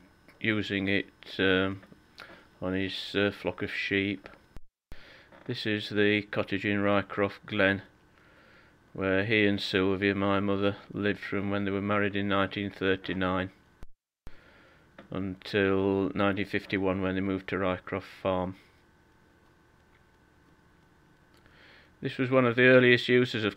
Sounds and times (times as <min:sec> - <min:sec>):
Speech: 0:00.4 - 0:01.8, 0:02.6 - 0:04.4, 0:05.5 - 0:07.9, 0:09.0 - 0:13.6, 0:15.1 - 0:18.6, 0:22.0 - 0:23.5.